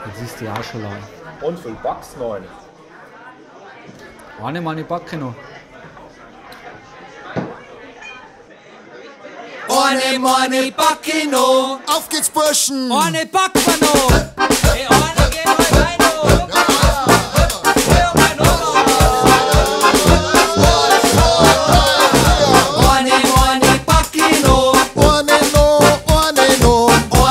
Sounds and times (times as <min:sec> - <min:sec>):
Male speech, man speaking: 0:00.0 - 0:02.6, 0:04.4 - 0:05.4, 0:11.9 - 0:14.0, 0:14.8 - 0:19.9
Music: 0:13.5 - 0:27.3.